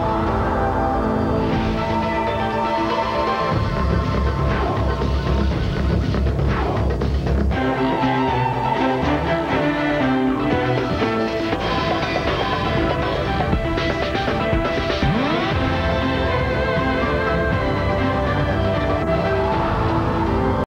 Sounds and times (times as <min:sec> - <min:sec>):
Music: 0:00.0 - 0:20.6.